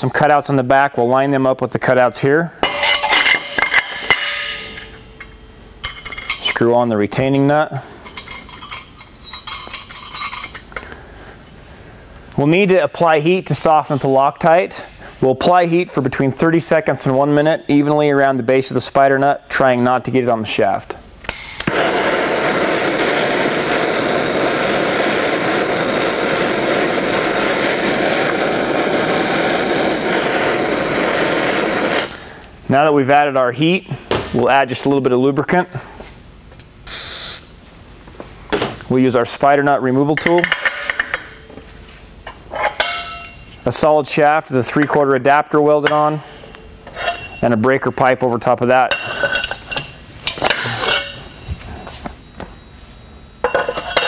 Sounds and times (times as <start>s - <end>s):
Speech: 0.0s - 2.6s, 6.4s - 7.8s, 12.4s - 21.0s, 32.7s - 35.8s, 38.9s - 40.5s, 43.6s - 46.3s, 47.4s - 49.0s.